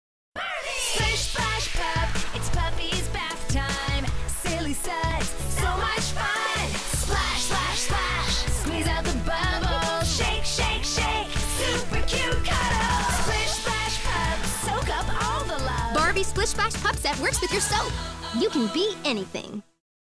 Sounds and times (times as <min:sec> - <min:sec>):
Music: 0:00.4 - 0:19.8
Speech: 0:15.9 - 0:19.7.